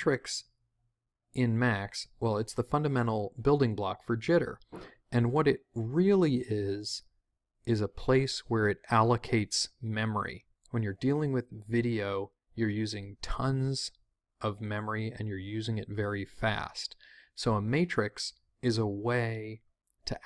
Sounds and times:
Speech: 0.0s - 0.5s, 1.4s - 20.2s.

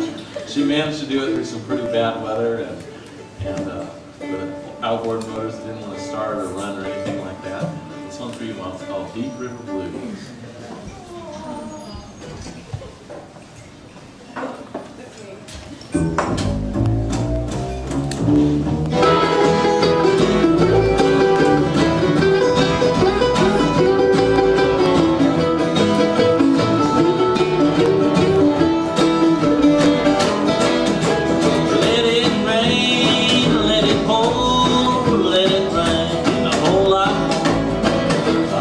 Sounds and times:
Speech: 0.5s - 11.9s
Music: 0.9s - 9.9s, 15.9s - 38.6s.

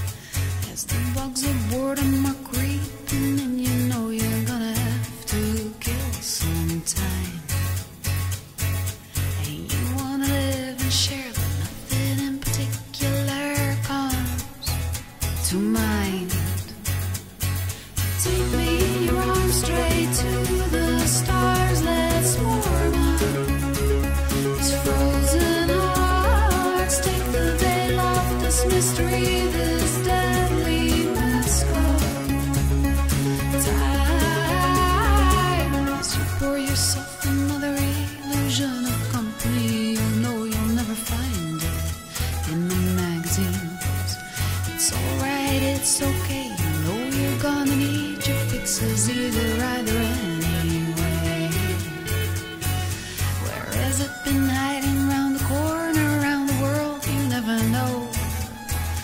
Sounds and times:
Music: 0.0s - 59.0s.

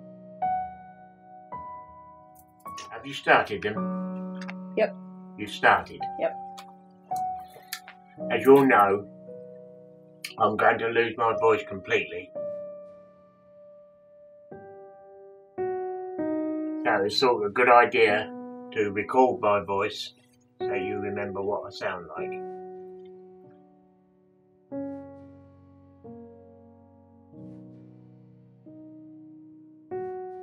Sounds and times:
Music: 0.0s - 30.4s
Male speech, man speaking: 2.8s - 3.8s, 5.4s - 6.1s, 8.3s - 9.1s, 10.3s - 12.3s, 16.8s - 22.4s.

